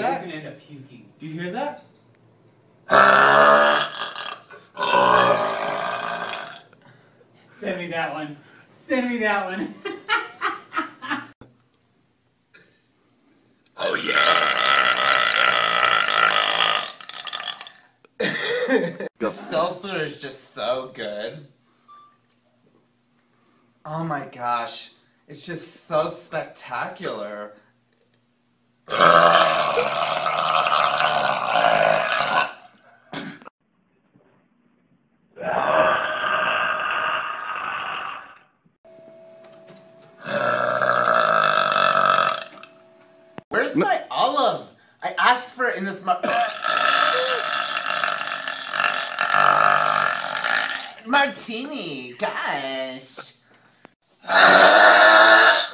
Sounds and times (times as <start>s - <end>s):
Burping, eructation: 2.9s - 6.8s, 13.8s - 18.0s, 28.9s - 33.5s, 35.4s - 38.5s, 40.2s - 42.8s, 46.3s - 51.1s, 54.2s - 55.7s.